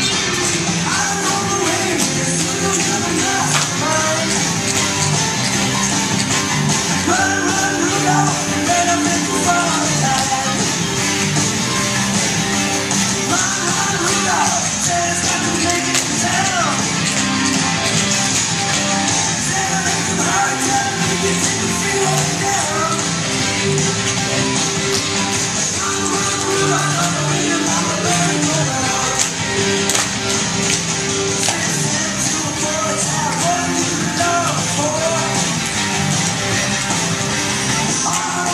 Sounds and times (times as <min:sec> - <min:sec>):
Music: 0:00.0 - 0:38.5.